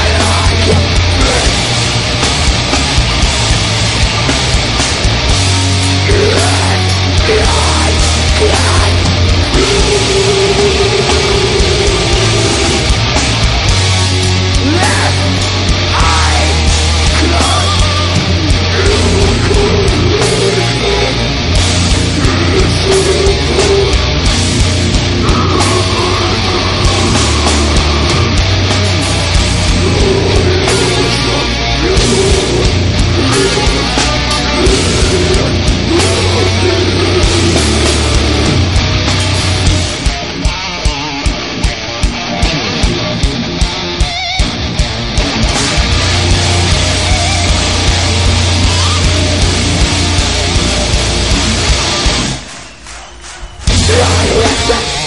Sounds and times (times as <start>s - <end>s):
Heavy metal: 0.0s - 55.0s.